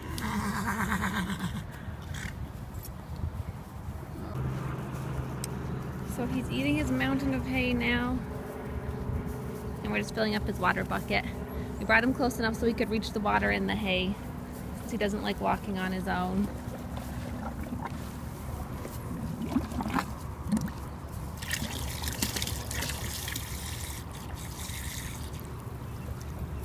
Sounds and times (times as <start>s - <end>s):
Speech: 6.1s - 8.2s, 9.8s - 14.2s, 14.9s - 16.5s
Gurgling: 19.1s - 20.8s, 21.4s - 25.5s
Liquid: 19.2s - 26.4s.